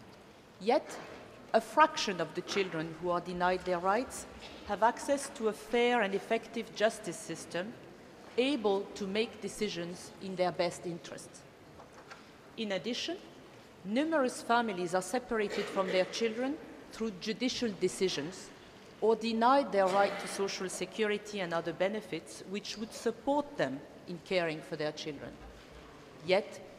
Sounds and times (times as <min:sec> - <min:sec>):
Narration, monologue: 0:00.0 - 0:26.7
Female speech, woman speaking: 0:00.6 - 0:01.0, 0:01.6 - 0:07.8, 0:08.4 - 0:11.4, 0:12.6 - 0:13.3, 0:13.9 - 0:25.4, 0:26.2 - 0:26.7.